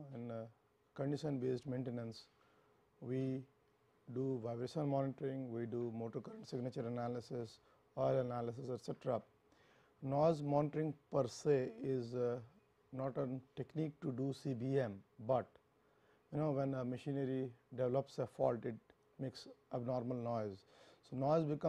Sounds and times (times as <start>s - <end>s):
Speech: 0.0s - 2.3s, 3.0s - 3.5s, 4.1s - 9.3s, 10.0s - 15.6s, 16.3s - 21.6s.